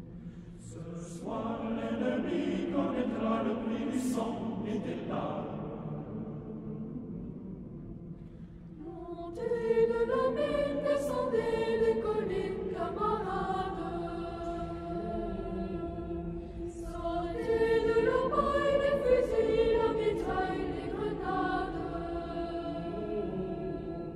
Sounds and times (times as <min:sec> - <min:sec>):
Mantra: 0:00.6 - 0:07.8, 0:08.8 - 0:24.1.